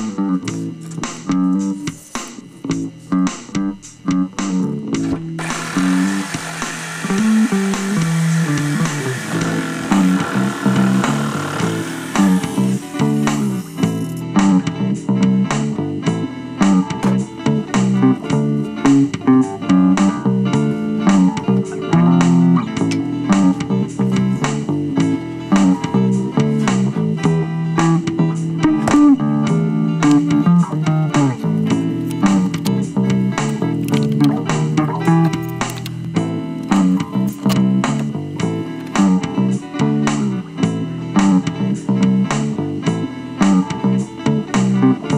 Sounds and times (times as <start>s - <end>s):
Electric guitar: 3.0s - 45.1s.